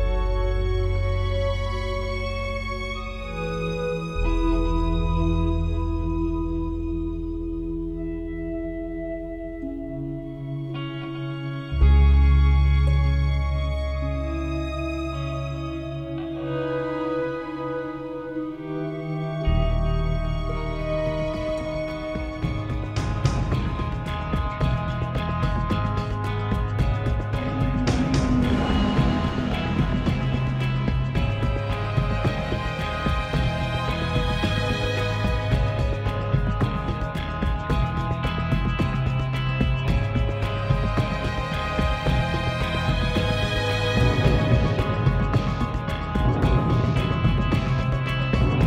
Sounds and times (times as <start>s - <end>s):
Background music: 0.0s - 48.6s.